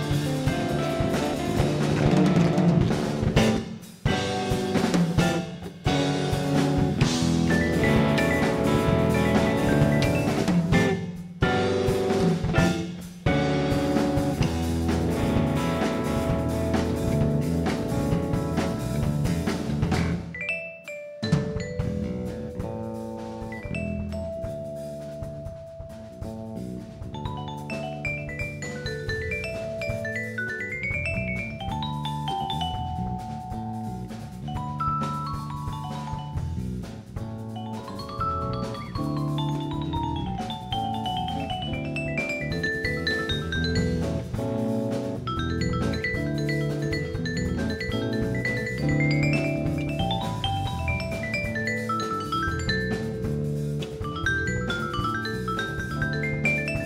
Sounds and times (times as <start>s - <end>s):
Vibraphone: 3.2s - 56.8s.